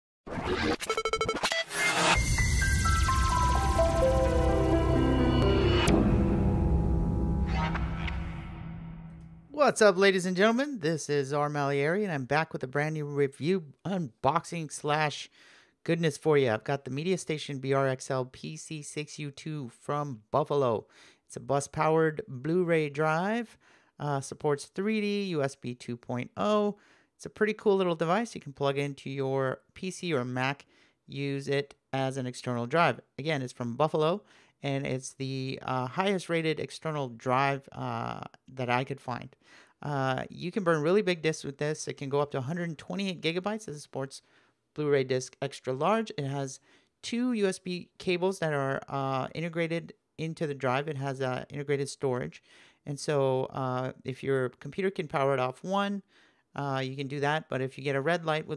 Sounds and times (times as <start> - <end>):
Music: 1.6 - 9.4
Speech: 9.5 - 44.2, 44.8 - 58.5.